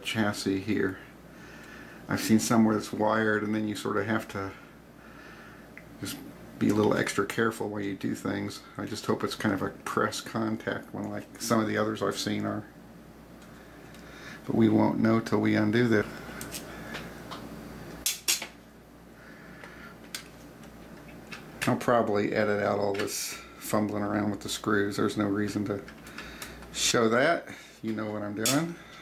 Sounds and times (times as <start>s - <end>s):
Speech: 0.0s - 1.1s, 2.1s - 4.6s, 6.0s - 12.8s, 14.4s - 16.2s, 21.6s - 25.9s, 26.8s - 28.8s.